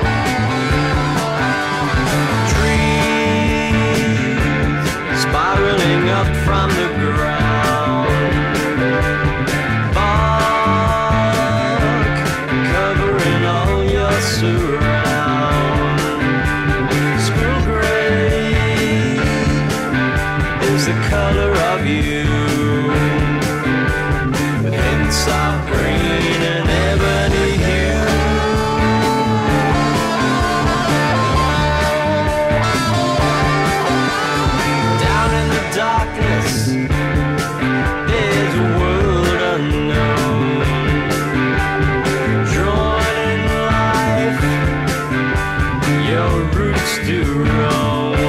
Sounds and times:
Music: 0:00.0 - 0:48.2.

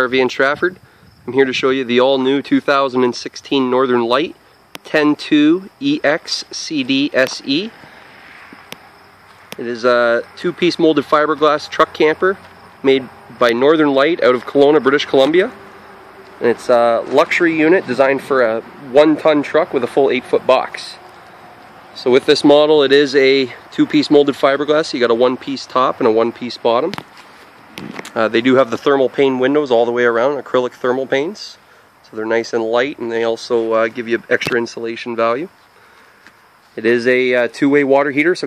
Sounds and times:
Speech: 0:00.0 - 0:07.7, 0:09.6 - 0:15.6, 0:16.4 - 0:21.0, 0:22.0 - 0:27.0, 0:28.1 - 0:35.5, 0:36.8 - 0:38.4.

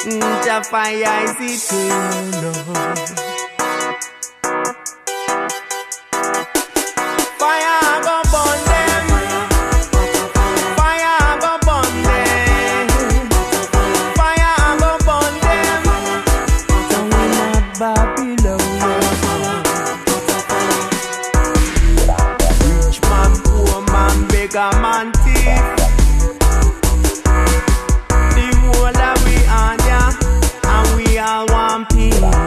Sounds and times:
Music: 0:00.0 - 0:32.4.

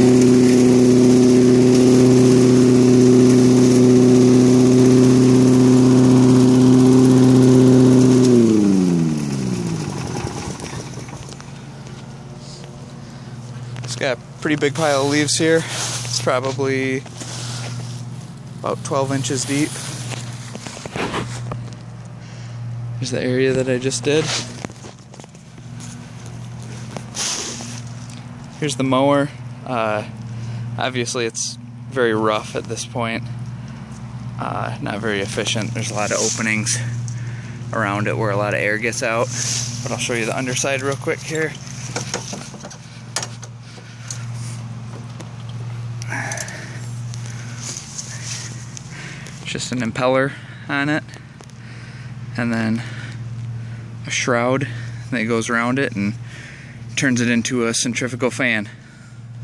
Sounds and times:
Rustling leaves: 0:00.0 - 0:22.6, 0:24.2 - 0:28.6, 0:35.4 - 0:37.7, 0:39.1 - 0:49.5
Lawn mower: 0:00.0 - 0:59.4
Outside, rural or natural: 0:00.0 - 0:59.4.

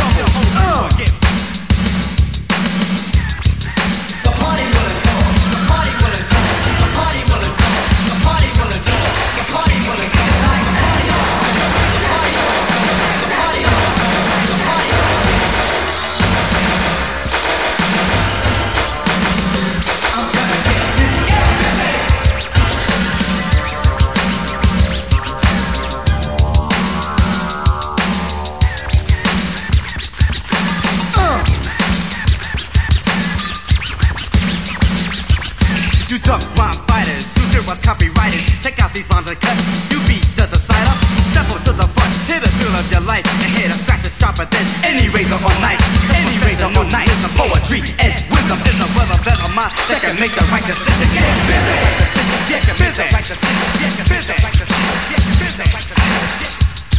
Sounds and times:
Electronic music: 0:02.6 - 0:38.5, 0:44.6 - 0:56.9
Sampler: 0:04.3 - 0:37.8.

